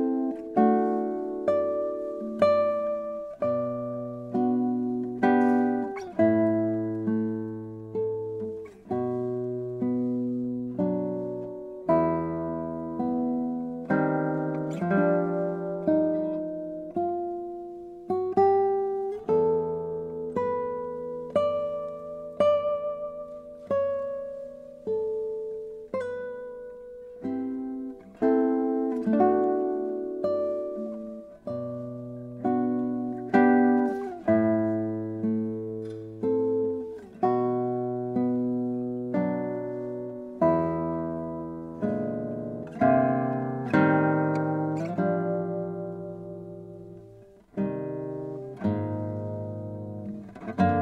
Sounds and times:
Acoustic guitar: 0.0 - 50.8
Strum: 0.0 - 50.8.

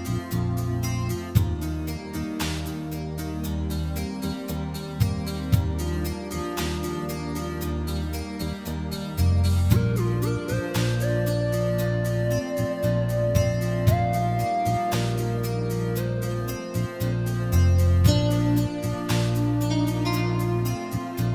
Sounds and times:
Music: 0.0 - 21.3.

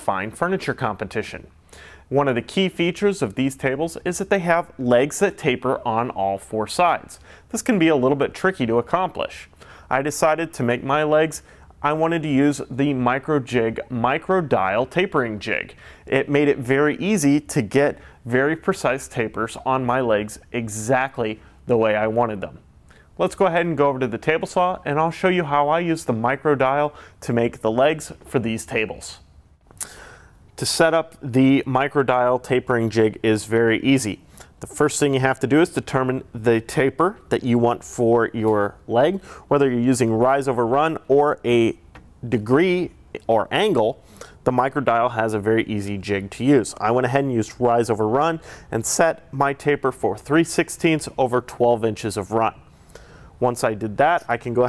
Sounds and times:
Speech: 0.0 - 22.6, 23.2 - 29.2, 30.6 - 52.6, 53.4 - 54.6.

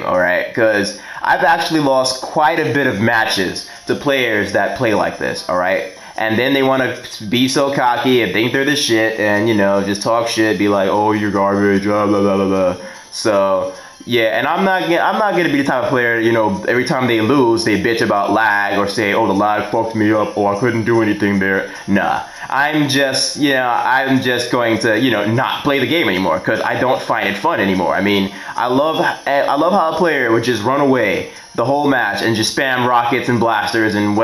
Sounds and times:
Speech: 0.0 - 34.2.

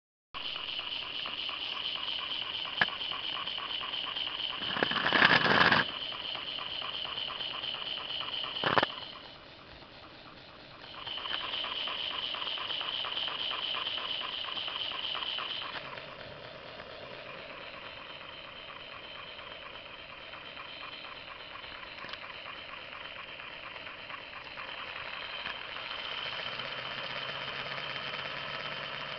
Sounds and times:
Outside, rural or natural: 0.4 - 29.1.

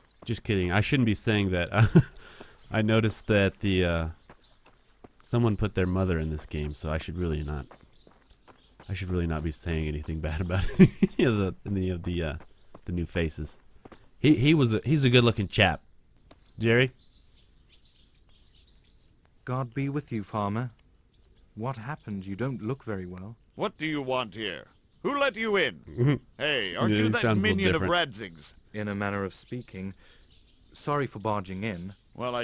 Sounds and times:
Bird vocalization, bird call, bird song: 0.0 - 32.4.

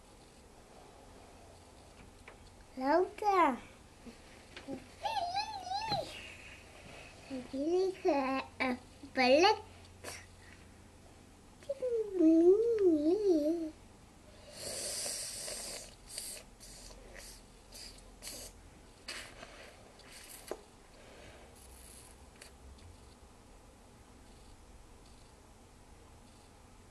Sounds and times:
Speech: 2.8 - 3.7, 4.7 - 6.3, 7.3 - 10.2, 11.6 - 13.8.

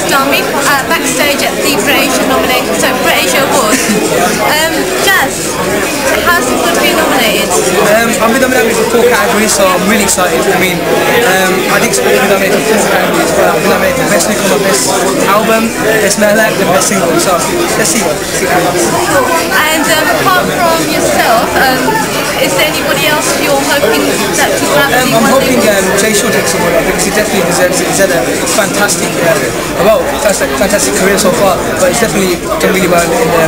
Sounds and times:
Speech: 6.1 - 33.4.

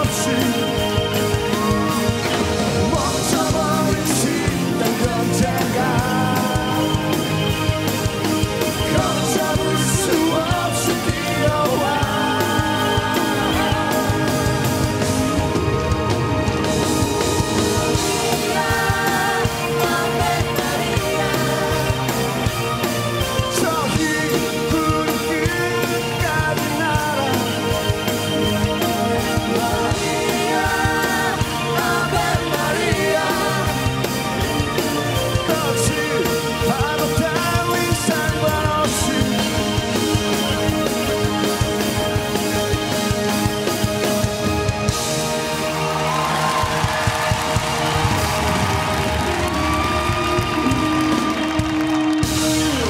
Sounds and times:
Male singing: 0.0 - 0.9, 2.9 - 7.2, 8.9 - 14.6, 23.5 - 27.5, 35.4 - 40.0
Music: 0.0 - 52.8.

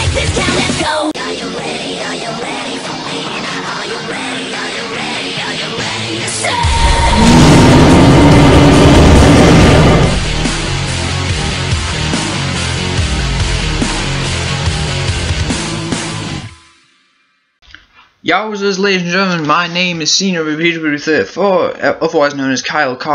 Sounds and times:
Music: 0.0 - 8.3, 8.9 - 17.9.

